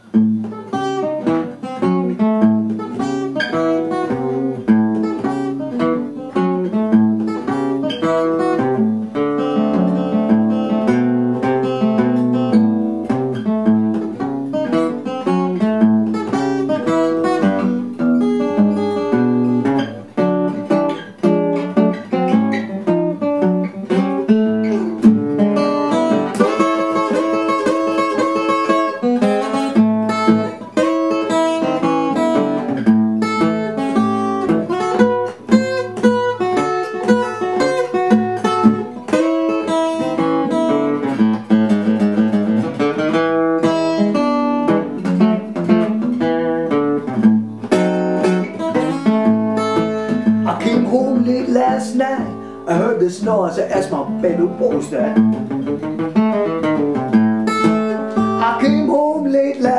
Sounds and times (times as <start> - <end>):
Music: 0.0 - 59.7.